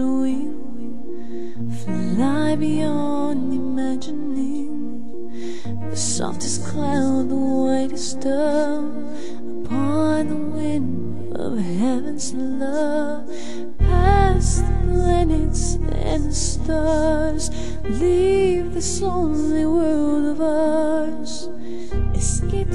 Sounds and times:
Music: 0:00.0 - 0:22.7.

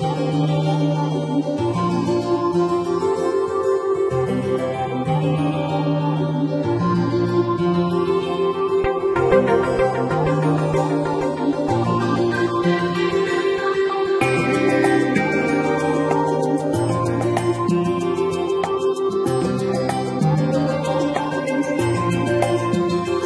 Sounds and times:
Music: 0:00.0 - 0:23.2.

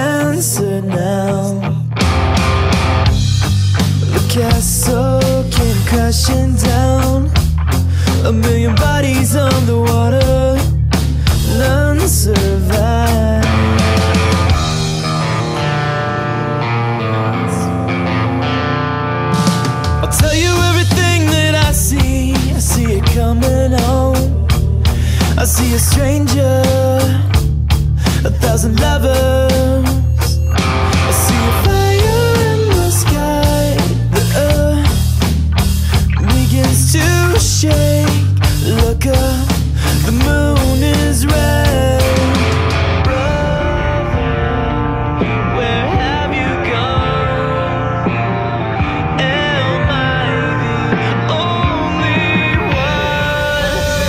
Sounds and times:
Music: 0:00.0 - 0:54.0.

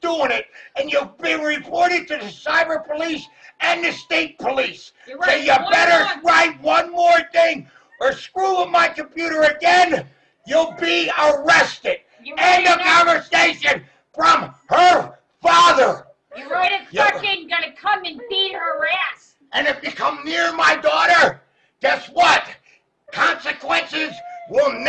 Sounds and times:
Speech: 0:00.0 - 0:24.8.

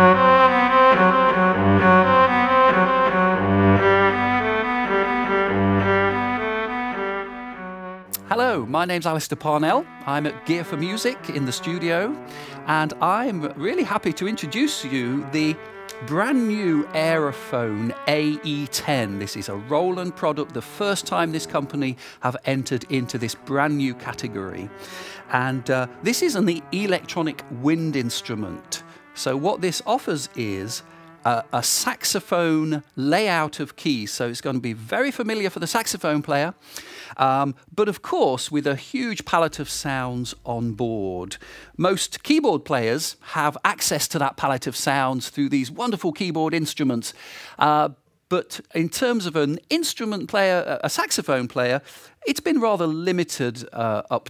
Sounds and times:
Music: 0:00.0 - 0:54.2
Speech: 0:08.2 - 0:24.7, 0:25.3 - 0:36.6, 0:37.2 - 0:54.2.

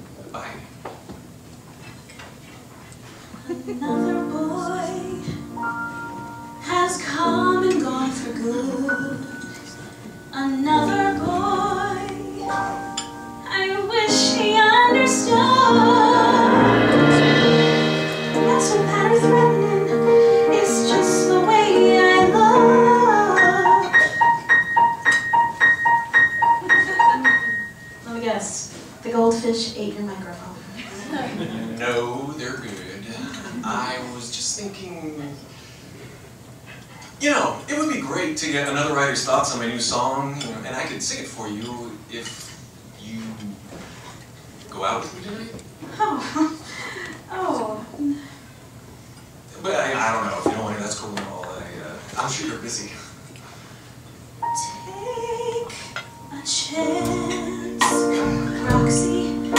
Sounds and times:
Inside, large room or hall: 0:00.0 - 0:59.5
Inside, public space: 0:00.0 - 0:59.5
Music: 0:03.9 - 0:28.1, 0:54.4 - 0:59.5.

